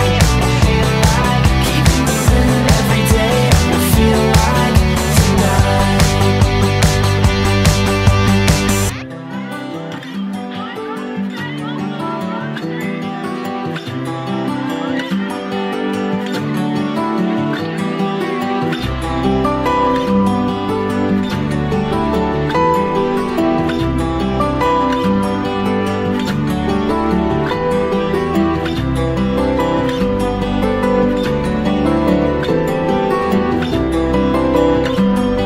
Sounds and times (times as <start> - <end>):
Background music: 0.0 - 35.4.